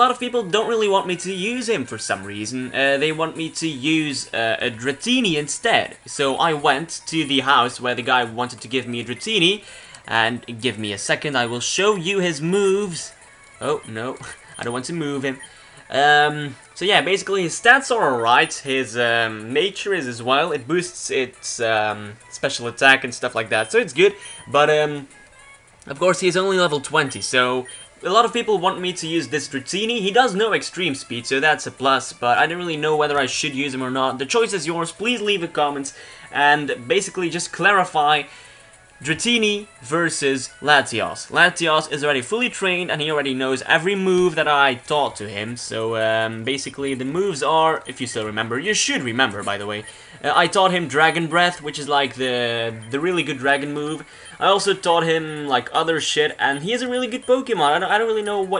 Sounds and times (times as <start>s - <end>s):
Speech: 0.0s - 25.1s, 25.9s - 38.3s, 39.0s - 58.6s.